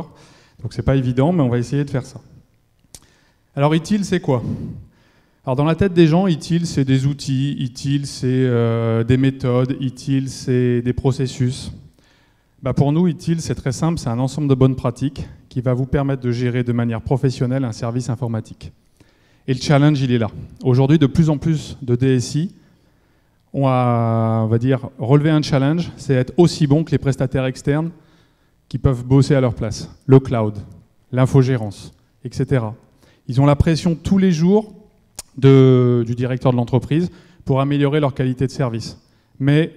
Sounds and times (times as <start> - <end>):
Speech: 0.0 - 2.4, 3.6 - 4.6, 5.5 - 11.9, 12.6 - 18.8, 19.5 - 22.6, 23.5 - 28.0, 28.7 - 39.7.